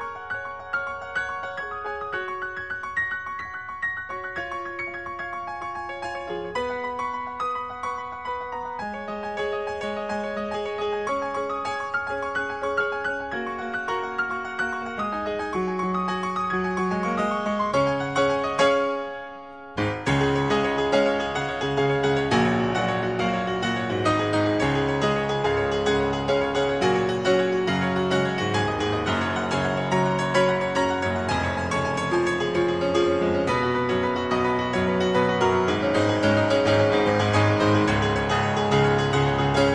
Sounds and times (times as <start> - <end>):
Music: 0.0 - 39.7.